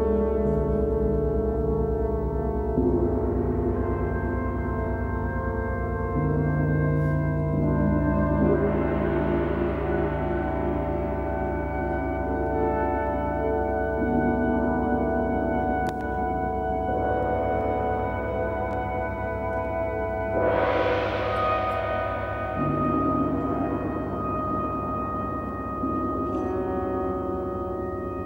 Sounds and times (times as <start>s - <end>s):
Percussion: 0.0s - 28.2s.